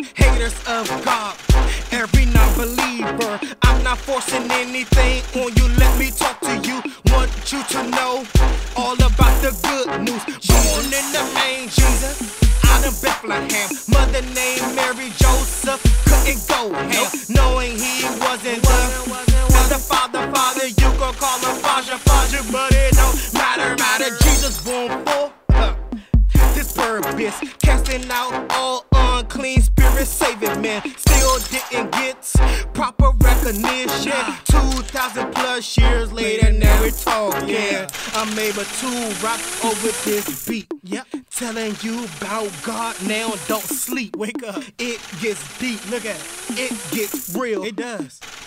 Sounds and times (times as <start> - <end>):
Music: 0.0 - 48.3.